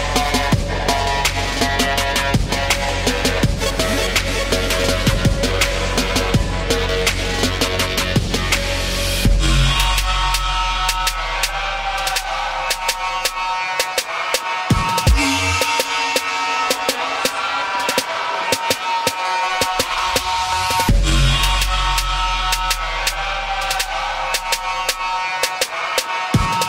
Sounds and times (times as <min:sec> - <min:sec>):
Music: 0:00.0 - 0:26.6.